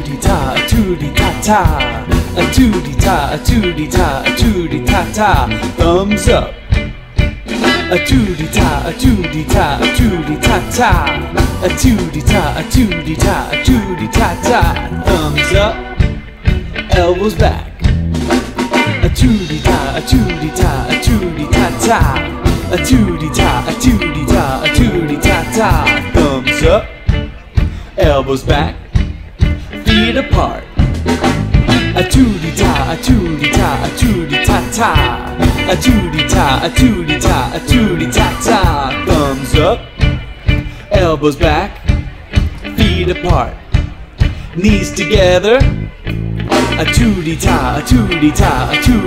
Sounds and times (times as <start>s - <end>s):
Music: 0.0s - 49.0s.